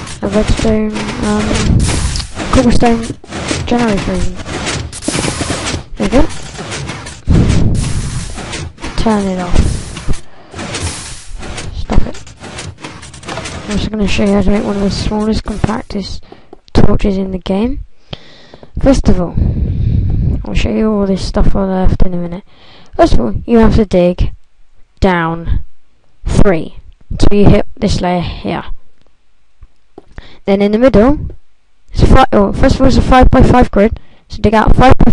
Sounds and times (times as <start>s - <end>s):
Speech: 0.2s - 1.7s, 2.4s - 4.4s, 6.0s - 6.4s, 8.9s - 9.7s, 11.7s - 12.2s, 13.6s - 17.8s, 18.8s - 19.5s, 20.4s - 24.4s, 25.0s - 25.6s, 26.2s - 28.8s, 30.4s - 35.1s.